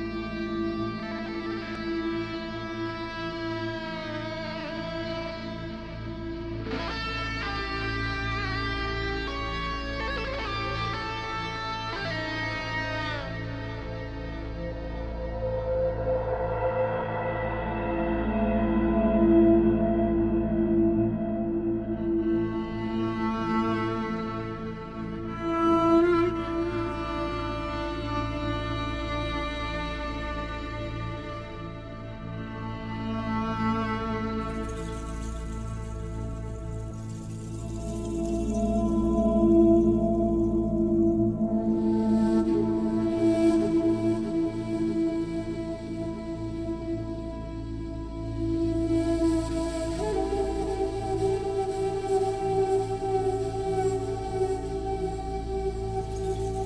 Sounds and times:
Music: 0.0s - 56.6s.

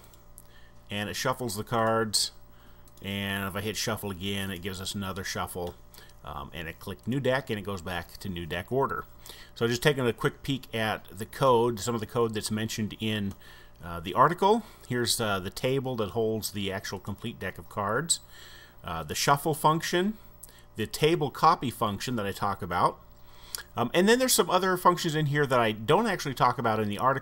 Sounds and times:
Speech: 0.9s - 2.4s, 3.0s - 18.2s, 18.8s - 20.2s, 20.8s - 23.0s, 23.8s - 27.2s.

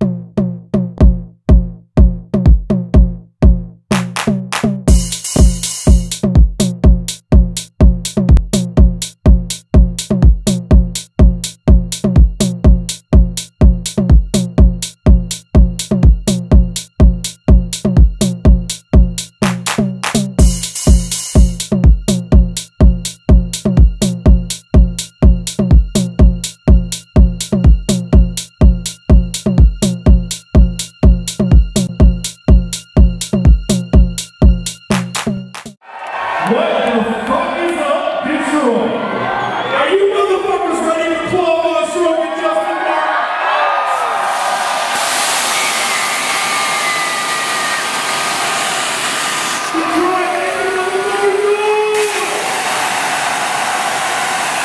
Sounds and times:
Music: 0.0s - 35.8s.

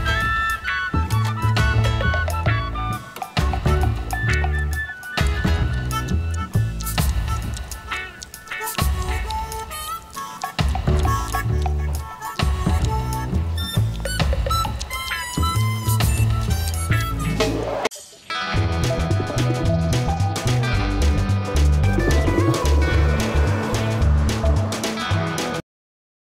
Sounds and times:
Music: 0.0s - 25.6s.

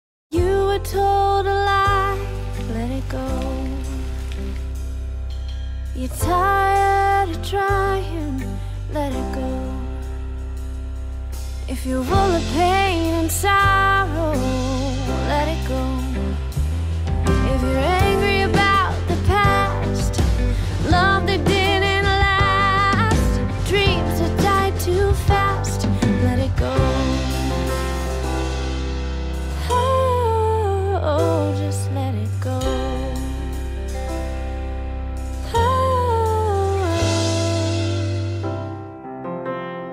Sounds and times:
Music: 0.3s - 39.9s.

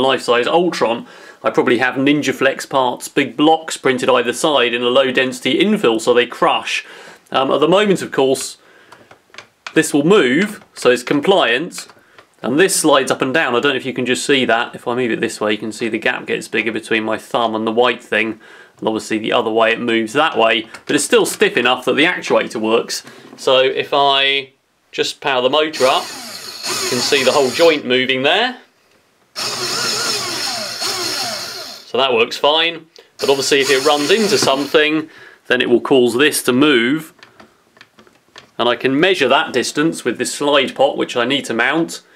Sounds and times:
Speech: 0.0s - 8.6s, 9.7s - 28.7s, 31.9s - 37.2s, 38.6s - 42.1s
Inside, small room: 0.0s - 42.1s.

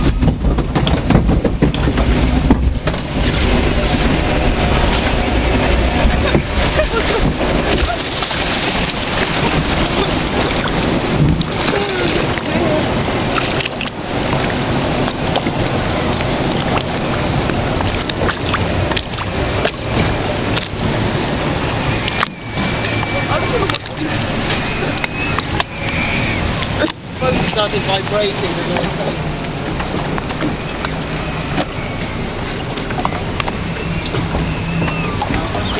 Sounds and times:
Ship: 0.0s - 35.7s
Gurgling: 2.9s - 27.8s
Speech: 27.2s - 29.2s.

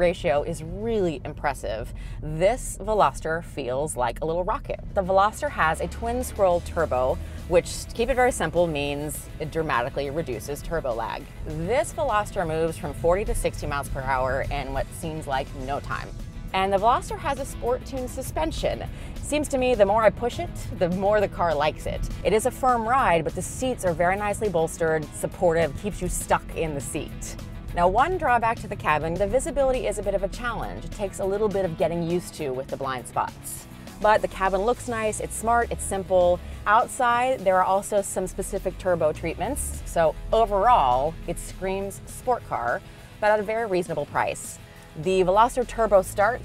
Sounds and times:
Music: 0.0s - 46.4s
Speech: 0.0s - 46.4s.

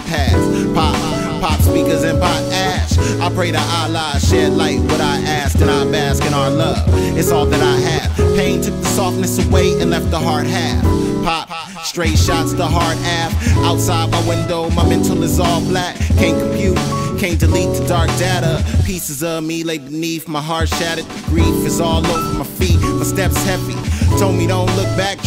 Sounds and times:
Hip hop music: 0.0s - 25.2s
Rapping: 0.0s - 25.2s.

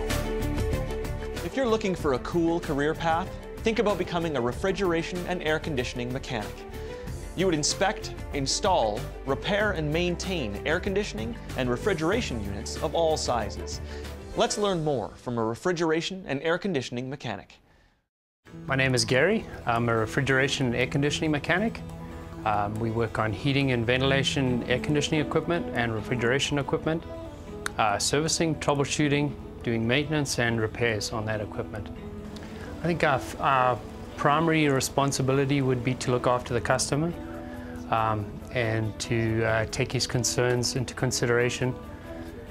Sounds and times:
Music: 0.0s - 17.8s, 18.4s - 42.5s
Speech: 1.4s - 6.6s, 7.4s - 13.8s, 14.4s - 17.6s, 18.7s - 21.8s, 22.5s - 27.0s, 27.7s - 31.9s, 32.8s - 37.2s, 37.9s - 41.8s.

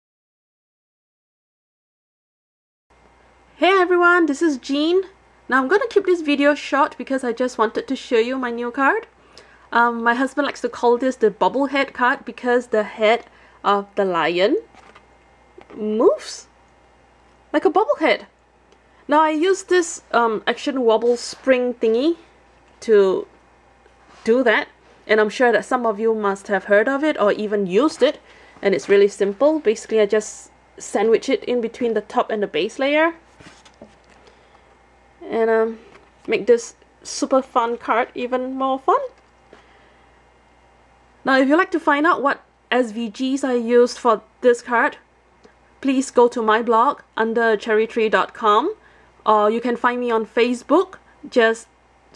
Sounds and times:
Speech: 3.6s - 14.7s, 15.6s - 16.6s, 17.5s - 18.4s, 19.1s - 23.3s, 24.2s - 33.2s, 35.2s - 39.2s, 41.2s - 45.1s, 45.8s - 51.8s.

